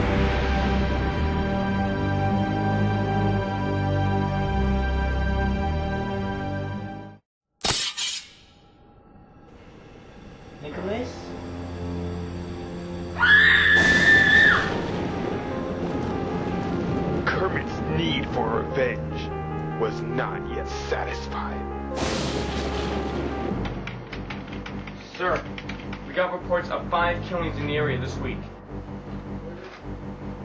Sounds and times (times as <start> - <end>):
Music: 0.0 - 7.2, 8.7 - 30.4.